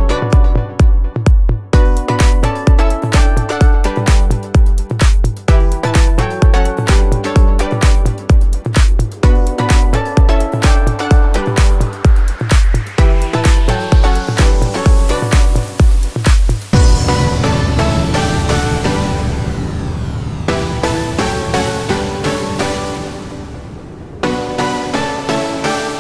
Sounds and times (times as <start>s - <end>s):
Music: 0.0s - 26.0s.